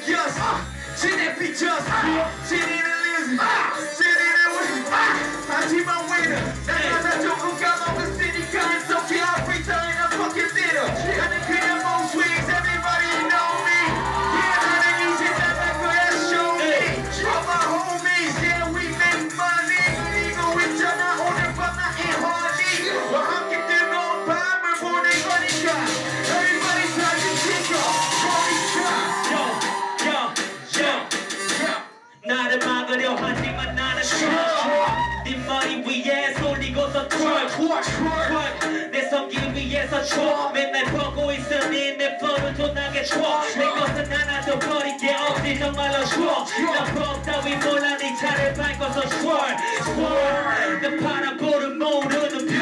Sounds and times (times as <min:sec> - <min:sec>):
Music: 0:00.0 - 0:52.6.